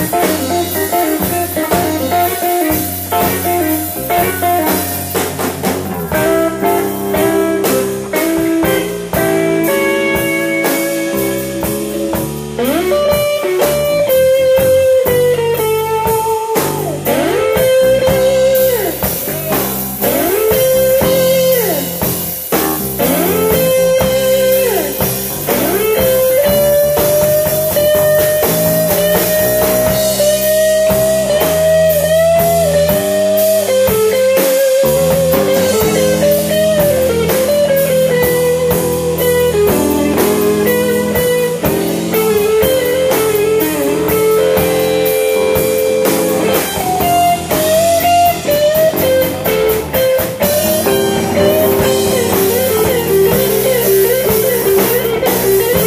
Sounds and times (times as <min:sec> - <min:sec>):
Drum: 0:00.0 - 0:55.8
Electric guitar: 0:00.0 - 0:55.8
Rock music: 0:00.0 - 0:55.8.